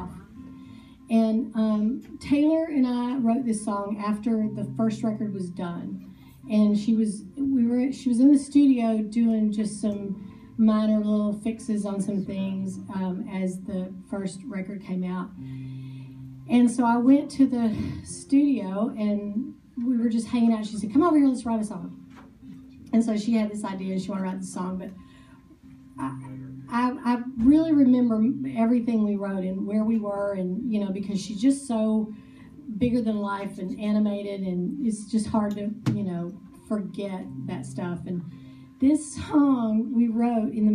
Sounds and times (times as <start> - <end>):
Music: 0.0 - 40.7.